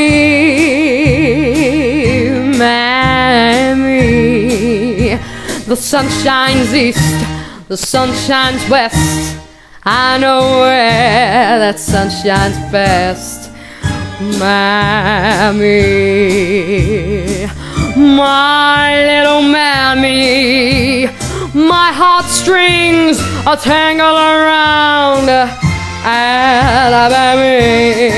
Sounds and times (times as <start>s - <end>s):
Female singing: 0.0s - 13.4s, 14.2s - 28.1s
Music: 0.0s - 28.1s.